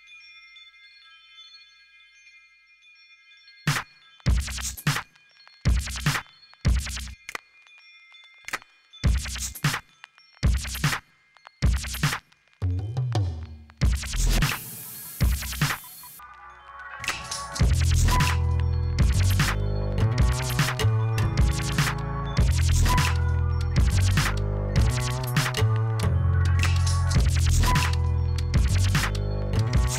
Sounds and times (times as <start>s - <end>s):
Scratching (performance technique): 3.7s - 5.1s, 5.7s - 7.2s, 9.1s - 11.0s, 11.6s - 16.3s, 17.0s - 29.9s.